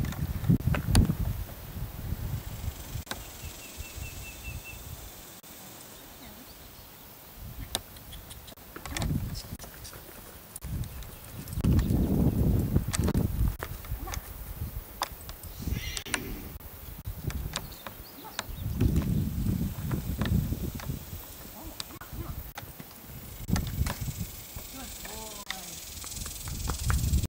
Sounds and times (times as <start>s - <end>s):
Speech: 6.2s - 6.5s, 24.7s - 25.8s
Clip-clop: 7.6s - 16.3s, 17.2s - 27.2s.